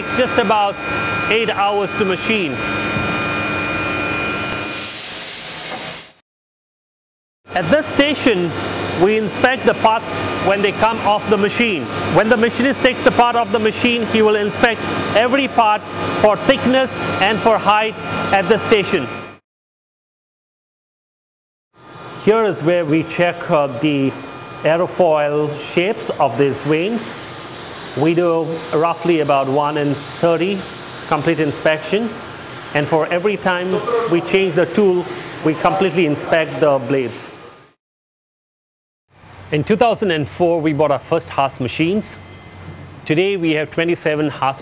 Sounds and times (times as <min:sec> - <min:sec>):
Speech: 0:00.0 - 0:02.6, 0:07.6 - 0:19.1, 0:22.2 - 0:27.2, 0:28.0 - 0:32.2, 0:32.8 - 0:37.4, 0:39.5 - 0:42.2, 0:43.0 - 0:44.6.